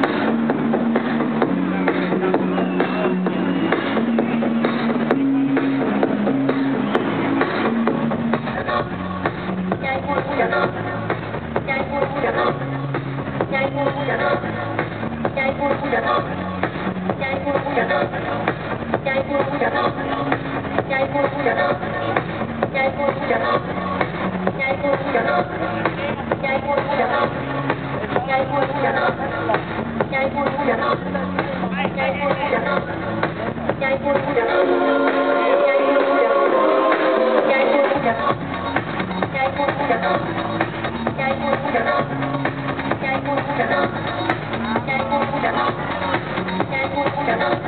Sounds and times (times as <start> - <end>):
Music: 0.0 - 47.6
Speech: 17.2 - 18.2, 24.6 - 27.3, 27.9 - 34.6.